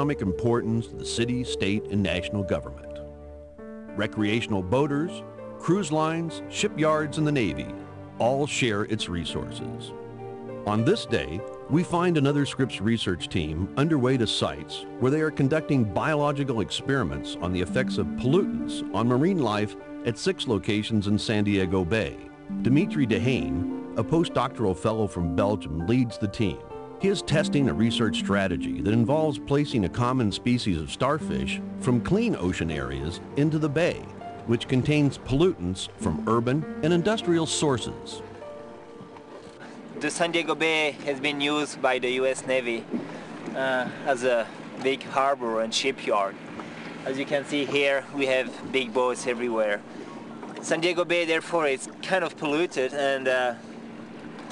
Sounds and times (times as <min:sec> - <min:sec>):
Speech: 0:00.0 - 0:03.0, 0:04.0 - 0:09.9, 0:10.7 - 0:38.2, 0:40.0 - 0:42.8, 0:43.6 - 0:46.4, 0:47.1 - 0:49.8, 0:50.6 - 0:53.6
Music: 0:00.0 - 0:46.2.